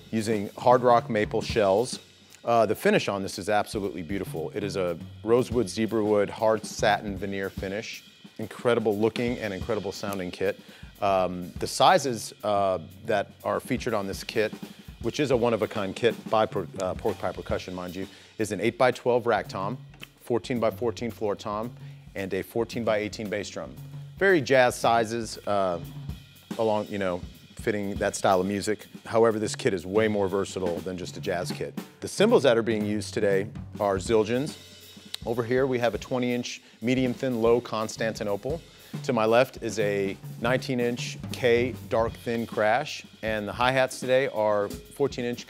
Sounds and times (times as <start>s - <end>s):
Bass drum: 0.0s - 45.4s
Drum kit: 0.0s - 45.4s
Rimshot: 8.5s - 12.0s, 37.0s - 45.1s.